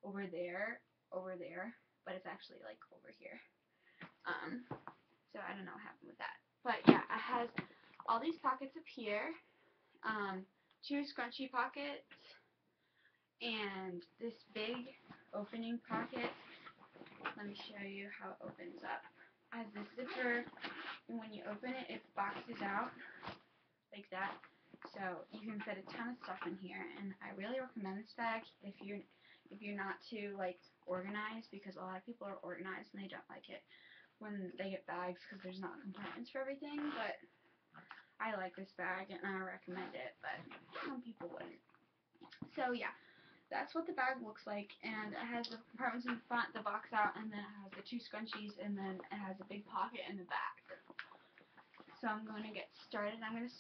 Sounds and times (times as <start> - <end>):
Speech: 0.0 - 3.5, 4.2 - 9.4, 10.0 - 12.4, 13.4 - 16.6, 17.2 - 23.4, 24.0 - 37.2, 37.8 - 41.6, 42.3 - 51.2, 51.8 - 53.6
Inside, small room: 0.0 - 53.6.